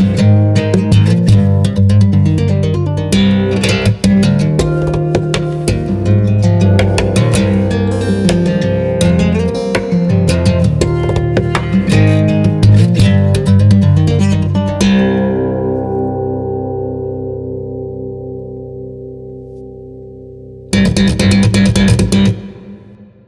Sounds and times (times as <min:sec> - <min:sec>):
Tapping (guitar technique): 0:00.0 - 0:16.0, 0:20.7 - 0:22.9
Acoustic guitar: 0:00.0 - 0:23.1.